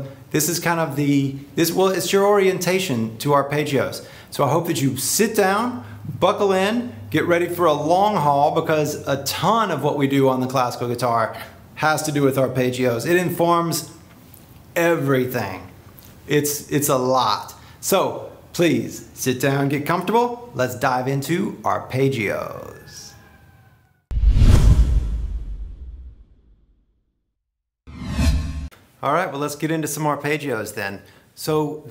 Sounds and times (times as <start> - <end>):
Speech: 0.0 - 14.0, 14.8 - 23.2, 29.0 - 31.9.